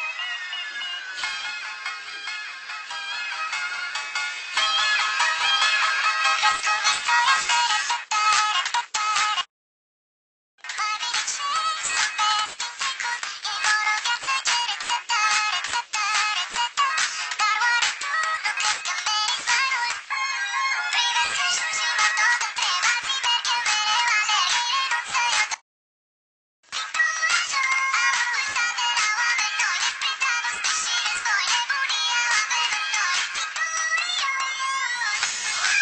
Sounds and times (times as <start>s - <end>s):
Music: 0.0s - 9.5s, 10.6s - 25.6s, 26.7s - 35.8s
Synthetic singing: 4.6s - 9.4s, 10.6s - 25.6s, 26.7s - 35.8s.